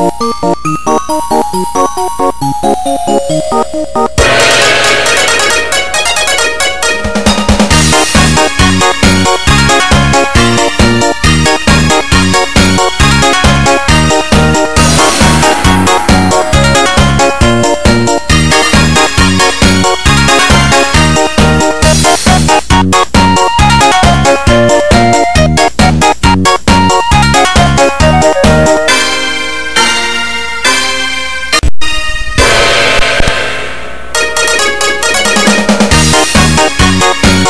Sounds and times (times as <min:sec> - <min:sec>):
Music: 0:00.0 - 0:37.4.